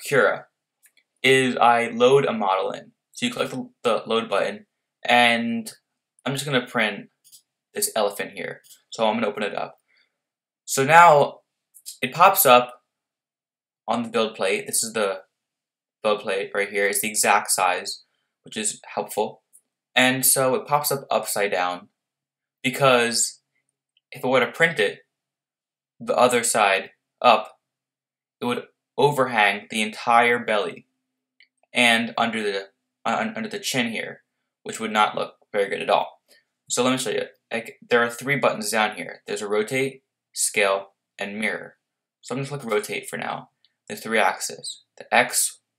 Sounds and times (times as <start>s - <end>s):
Speech: 0.0s - 0.5s, 1.3s - 7.2s, 7.8s - 9.8s, 10.7s - 12.8s, 13.9s - 15.2s, 16.1s - 21.9s, 22.7s - 23.4s, 24.2s - 25.0s, 26.0s - 27.5s, 28.4s - 30.8s, 31.8s - 45.7s.